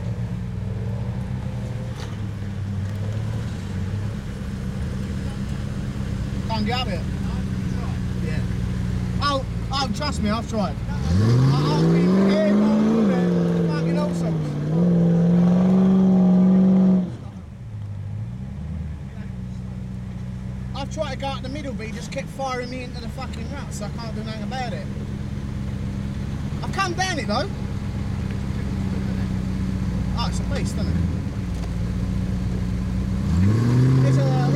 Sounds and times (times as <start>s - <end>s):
Car: 0.0s - 34.5s
Speech: 6.5s - 8.5s, 9.2s - 14.5s, 20.7s - 25.0s, 26.6s - 27.6s, 30.1s - 31.0s, 34.0s - 34.5s.